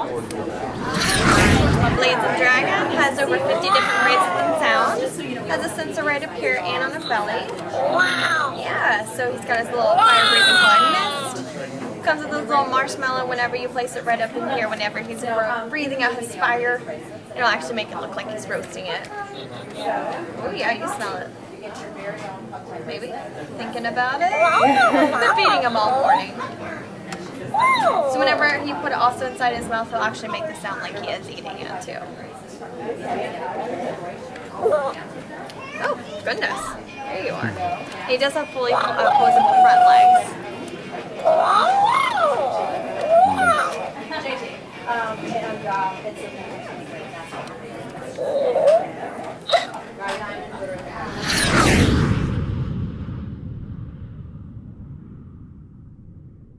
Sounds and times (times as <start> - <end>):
Speech: 0.0 - 51.4.